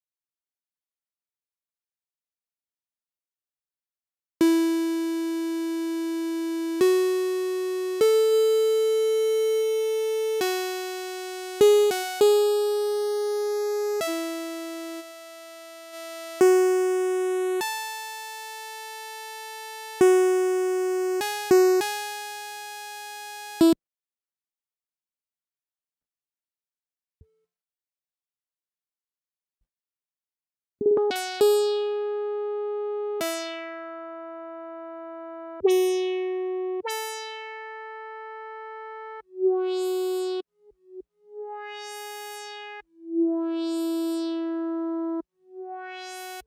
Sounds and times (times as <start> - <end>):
Music: 4.4 - 23.8, 30.8 - 46.4.